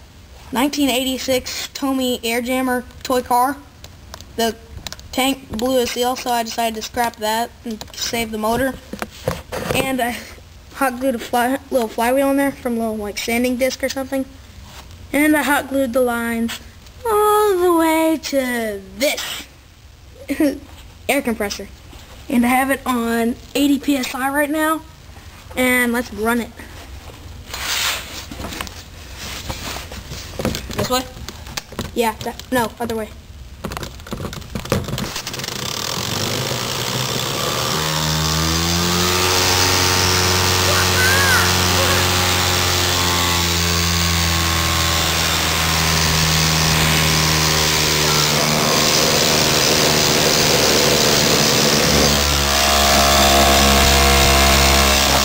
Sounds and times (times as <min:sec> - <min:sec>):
Speech: 0:00.5 - 0:03.7, 0:04.4 - 0:08.9, 0:09.7 - 0:14.3, 0:15.1 - 0:19.5, 0:20.2 - 0:24.9, 0:25.6 - 0:26.7, 0:30.8 - 0:31.2, 0:31.9 - 0:33.2, 0:40.7 - 0:42.1.